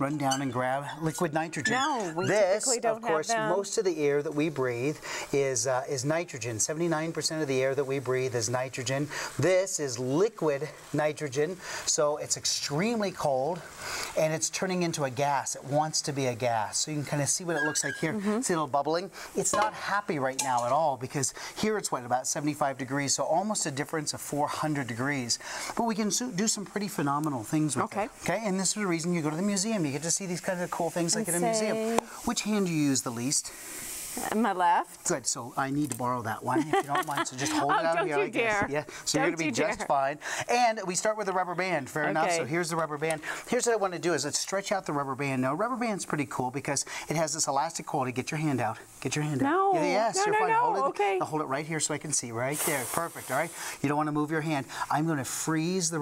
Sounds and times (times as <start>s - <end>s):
Speech: 0.0s - 4.7s, 25.8s - 33.3s, 34.3s - 46.6s, 47.4s - 56.0s.